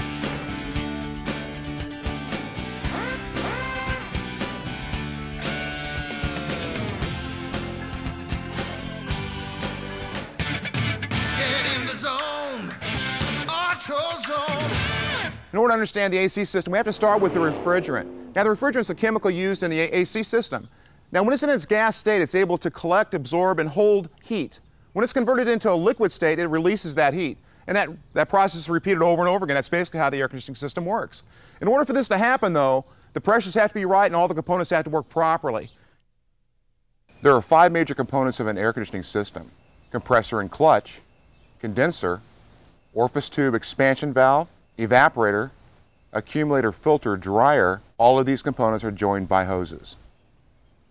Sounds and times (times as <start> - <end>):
Speech: 15.5 - 35.7, 37.2 - 41.0, 41.6 - 42.2, 43.0 - 45.6, 46.2 - 50.0.